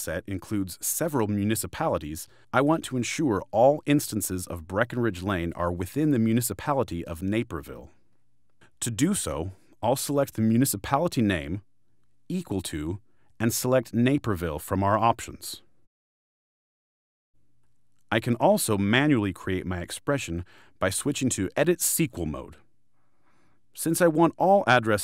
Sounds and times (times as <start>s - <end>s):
Speech: 0.0s - 8.0s, 8.8s - 11.7s, 12.3s - 15.7s, 18.1s - 22.7s, 23.8s - 25.0s.